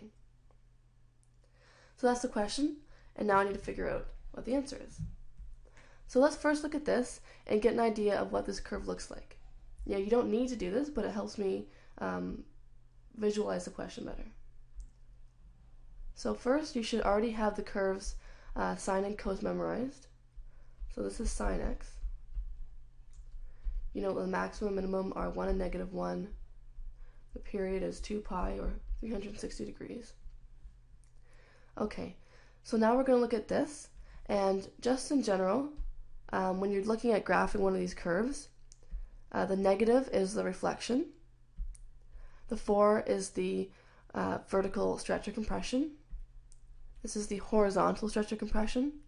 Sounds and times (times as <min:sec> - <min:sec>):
Speech: 0:02.0 - 0:05.1, 0:06.1 - 0:12.5, 0:13.2 - 0:14.4, 0:16.2 - 0:20.1, 0:20.9 - 0:22.0, 0:23.9 - 0:26.4, 0:27.4 - 0:30.2, 0:31.8 - 0:38.6, 0:39.3 - 0:41.2, 0:42.5 - 0:46.0, 0:47.0 - 0:49.0.